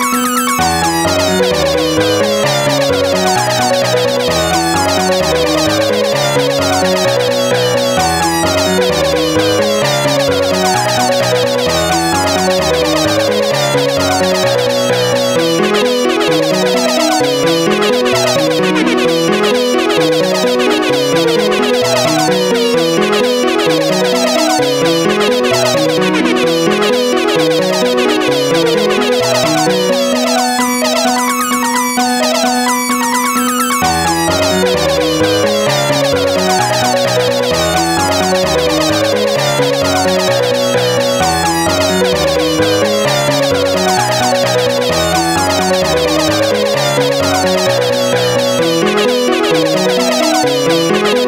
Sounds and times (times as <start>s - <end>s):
Music: 0.0s - 51.2s.